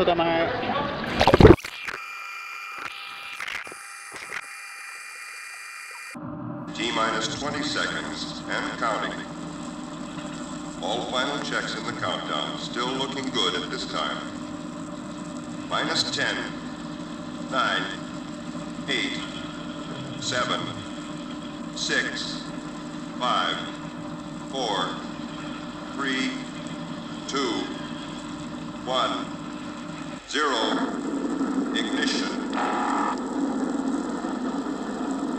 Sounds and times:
Mains hum: 0.0 - 35.3
Hum: 1.0 - 35.3.

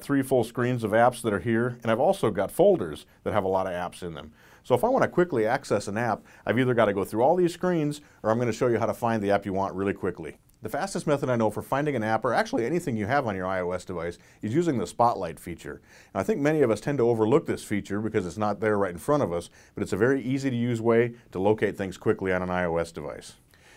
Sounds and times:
Speech: 0.0 - 23.4.

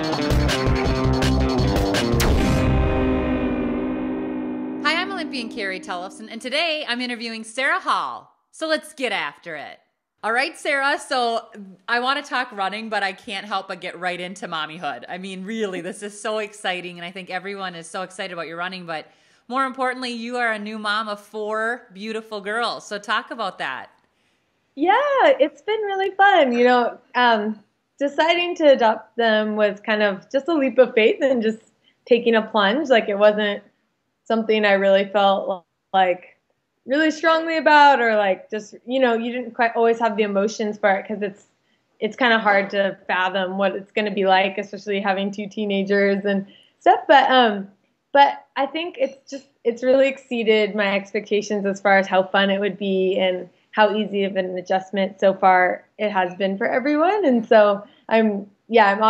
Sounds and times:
Inside, small room: 4.8 - 59.1
Female speech, woman speaking: 4.9 - 23.9, 24.8 - 33.7, 34.3 - 36.3, 36.9 - 41.4, 42.0 - 59.1.

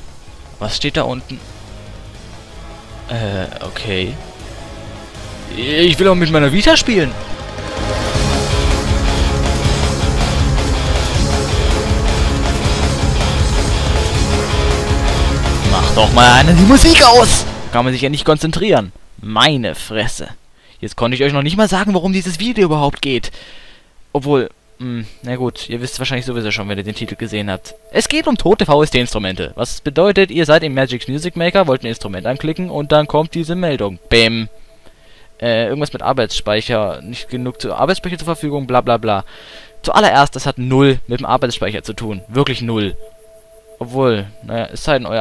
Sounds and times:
Music: 0.0 - 18.3, 24.6 - 40.5, 41.2 - 45.2
Speech: 0.6 - 1.4, 3.1 - 4.2, 5.5 - 7.2, 15.7 - 23.3, 24.2 - 34.5, 35.4 - 43.0, 43.8 - 45.2.

